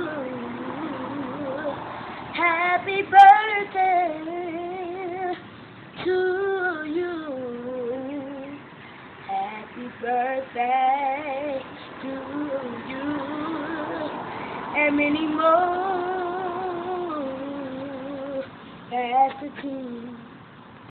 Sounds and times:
Male singing: 0.0 - 1.8, 2.4 - 5.4, 9.3 - 20.3.

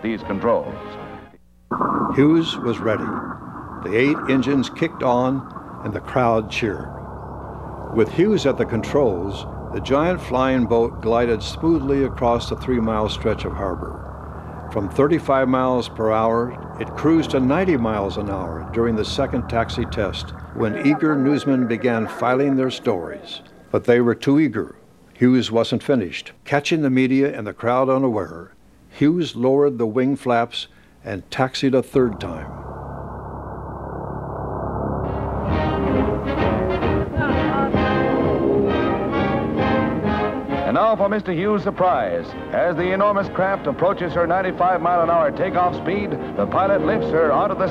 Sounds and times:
Speech: 0.0 - 1.0, 2.1 - 3.2, 3.8 - 6.9, 8.0 - 14.0, 14.7 - 32.6, 37.2 - 37.9, 40.7 - 47.7
Music: 0.0 - 1.4, 35.0 - 47.7.

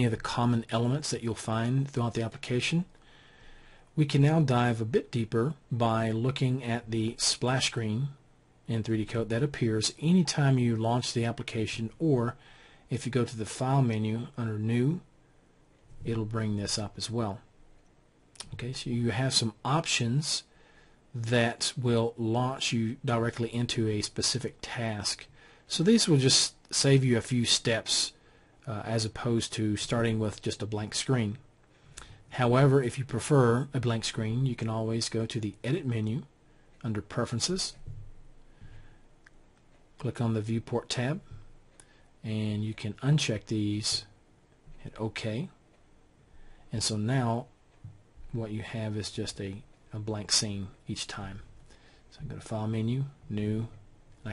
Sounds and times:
Speech: 0.0 - 2.9, 4.0 - 15.1, 16.0 - 17.5, 18.4 - 20.5, 21.2 - 31.5, 32.3 - 37.9, 40.0 - 41.4, 42.2 - 44.2, 44.8 - 45.6, 46.7 - 47.6, 48.3 - 51.5, 52.1 - 54.3.

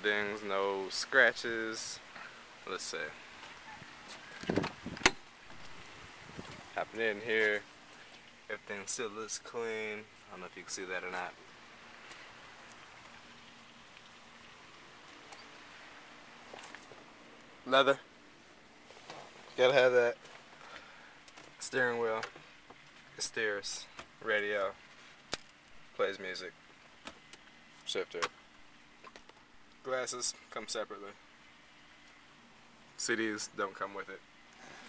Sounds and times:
Speech: 0.0 - 2.0, 2.6 - 3.2, 6.8 - 7.6, 8.5 - 11.4, 17.7 - 18.0, 19.6 - 20.2, 21.6 - 22.3, 23.2 - 24.8, 26.0 - 26.6, 27.9 - 28.3, 29.8 - 31.2, 33.0 - 34.2.

